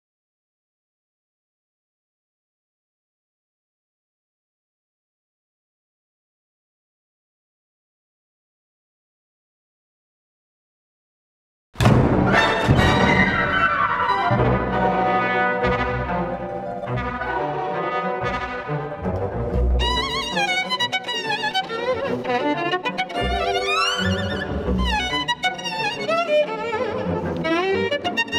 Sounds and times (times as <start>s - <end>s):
Brass instrument: 11.8s - 26.0s
Violin, fiddle: 12.4s - 28.3s.